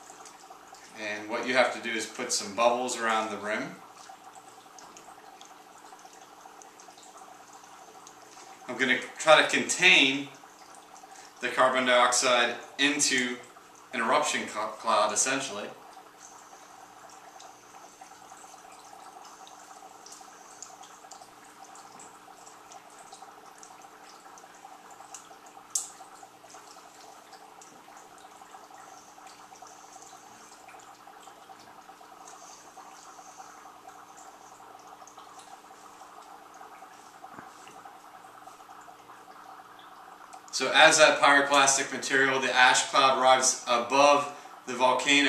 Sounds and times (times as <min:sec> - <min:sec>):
Speech: 0:01.0 - 0:03.8, 0:08.7 - 0:10.4, 0:11.4 - 0:15.8, 0:40.6 - 0:45.2.